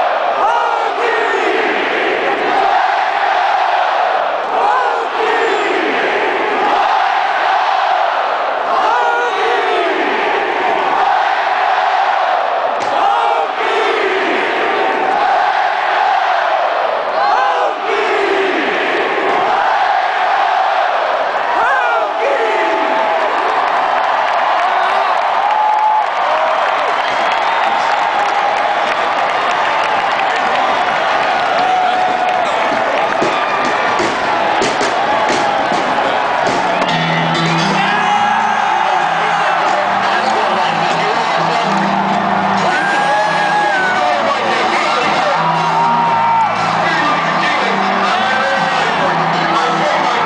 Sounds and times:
Applause: 23.1 - 36.8, 39.0 - 50.2
Clapping: 23.4 - 33.8
Music: 32.0 - 50.2.

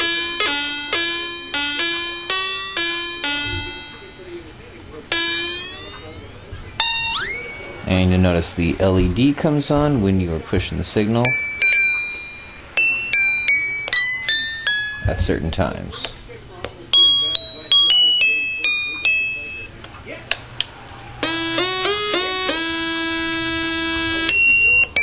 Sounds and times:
Piano: 0.0 - 4.4, 11.2 - 15.5, 21.2 - 25.0
Speech: 3.2 - 11.4, 12.8 - 20.4.

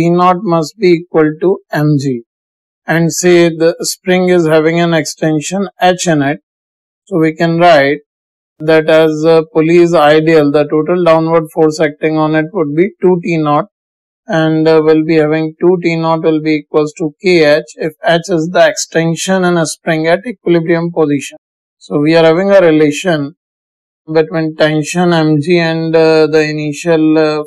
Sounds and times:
Speech: 0.0 - 2.2, 2.9 - 6.4, 7.1 - 8.0, 8.6 - 13.7, 14.3 - 23.4, 24.1 - 27.4.

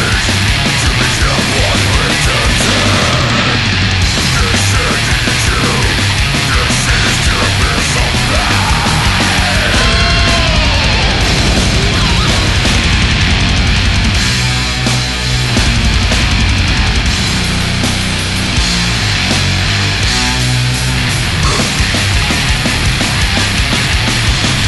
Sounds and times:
Heavy metal: 0.0 - 24.6.

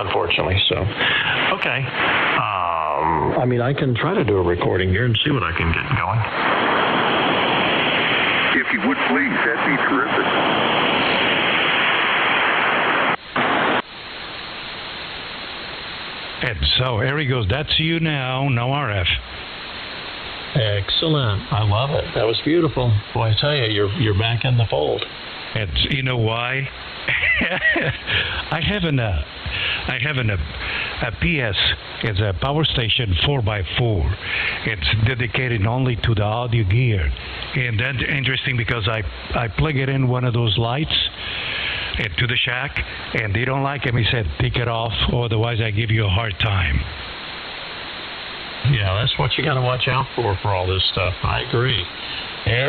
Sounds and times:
Speech: 0.0 - 6.3, 8.5 - 10.4, 16.4 - 19.2, 20.5 - 47.0, 48.6 - 52.6.

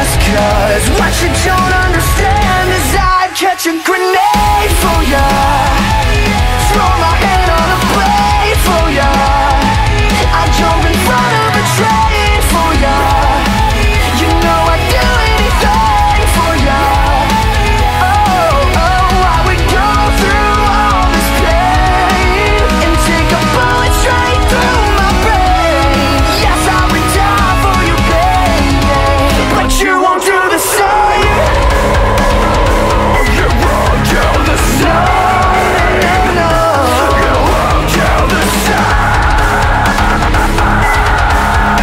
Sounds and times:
Music: 0.0 - 41.8.

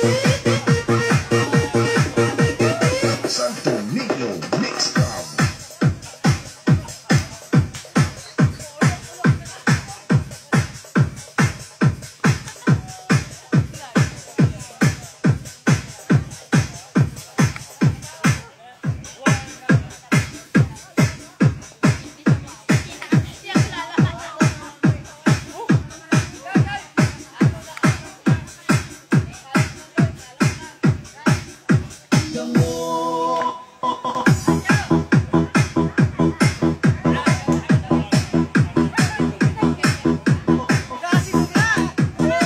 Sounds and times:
Speech: 0.0 - 11.6, 12.4 - 33.5, 34.4 - 42.4.

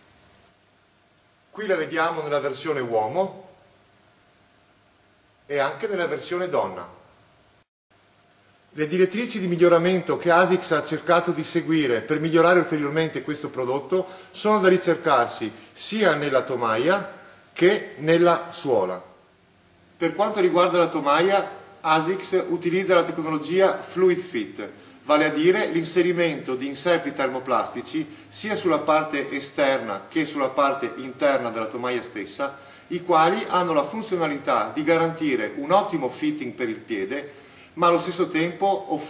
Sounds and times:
Speech: 1.6 - 3.6, 5.5 - 7.0, 8.8 - 19.2, 20.0 - 39.0.

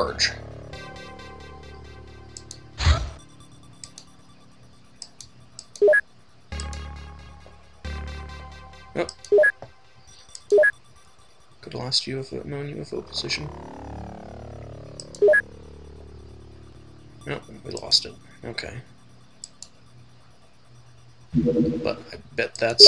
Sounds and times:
Speech: 0.0 - 0.4, 11.6 - 13.5, 17.3 - 18.9, 21.9 - 22.8
Music: 0.0 - 11.7, 12.9 - 19.8.

